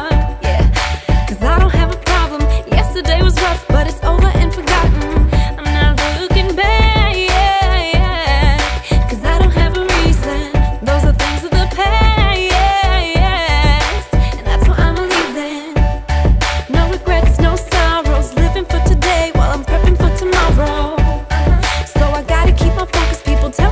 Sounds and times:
Exciting music: 0.0s - 23.7s.

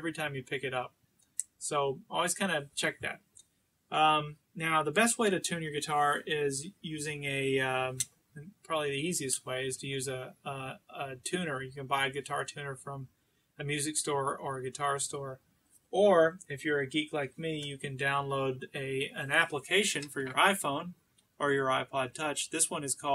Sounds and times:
Speech: 0.0s - 3.2s, 3.9s - 15.4s, 16.0s - 23.1s.

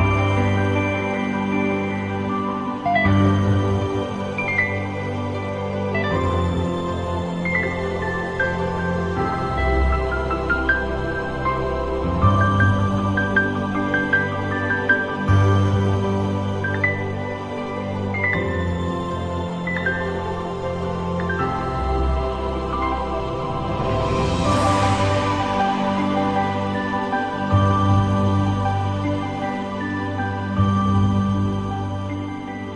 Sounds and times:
New-age music: 0.0s - 32.7s.

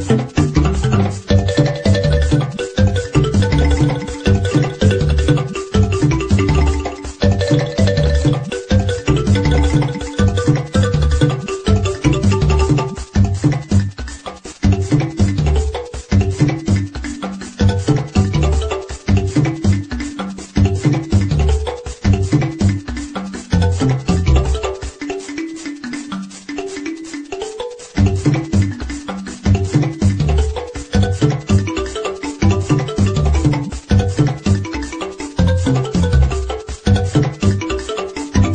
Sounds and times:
Video game music: 0.0s - 38.5s.

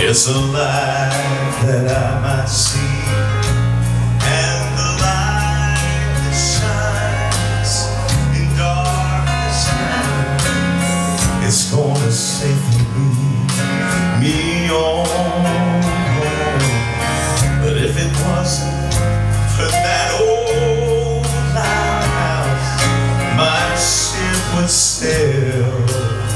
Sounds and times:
Male singing: 0.0s - 3.6s, 4.2s - 10.4s, 11.4s - 18.9s, 19.6s - 26.3s
Music: 0.0s - 26.3s.

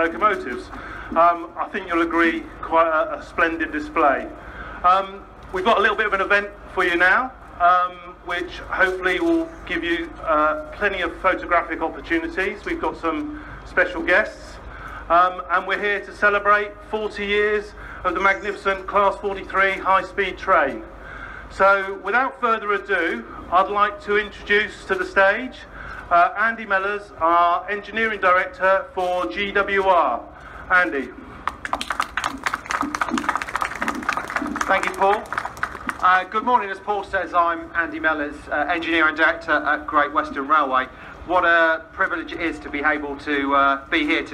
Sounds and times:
Speech: 0.0s - 20.9s, 21.5s - 31.2s, 34.6s - 35.3s, 36.0s - 44.3s.

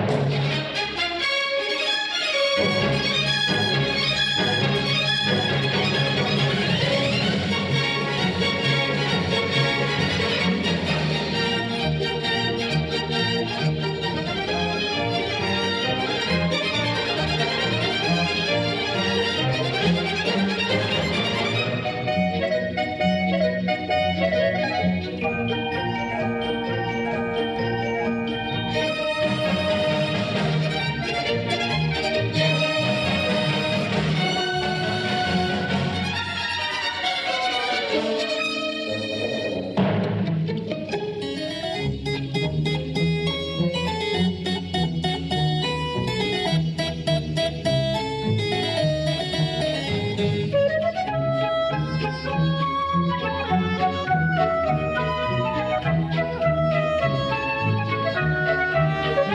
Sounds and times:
Music: 0.0s - 59.3s.

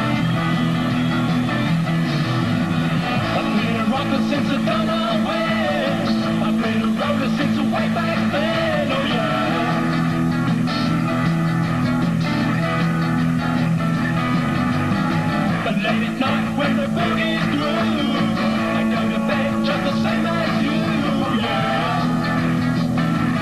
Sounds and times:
Music: 0.0s - 23.4s.

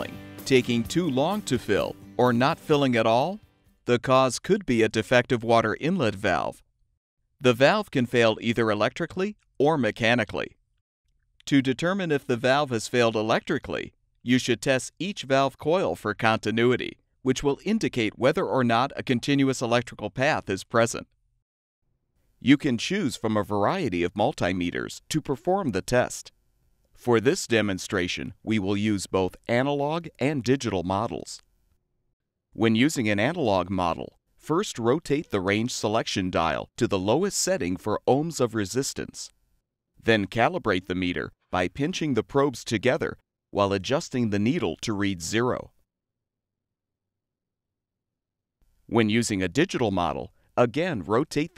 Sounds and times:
Speech: 0.0s - 6.6s, 7.4s - 10.6s, 11.4s - 21.1s, 22.4s - 26.3s, 27.0s - 31.4s, 32.6s - 39.3s, 40.0s - 45.8s, 48.9s - 51.5s.

